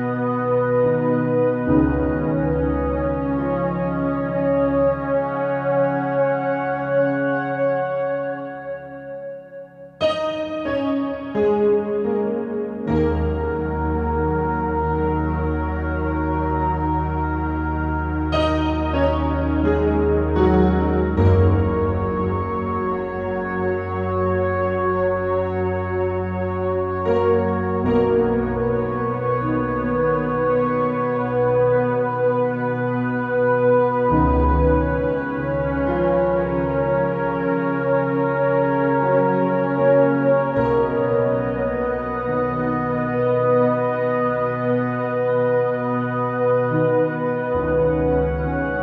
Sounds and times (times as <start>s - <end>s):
Ambient music: 0.0s - 48.8s.